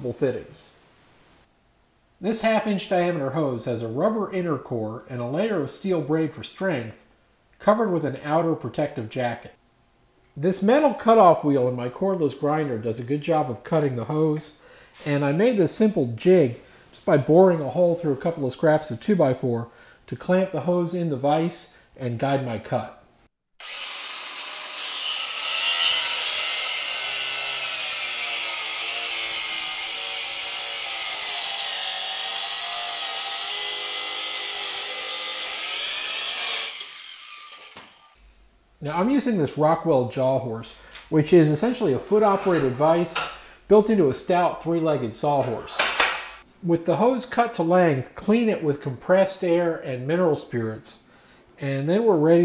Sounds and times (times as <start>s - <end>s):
Speech: 0.0s - 0.8s, 2.2s - 9.6s, 10.4s - 23.0s, 38.8s - 46.0s, 46.6s - 52.4s.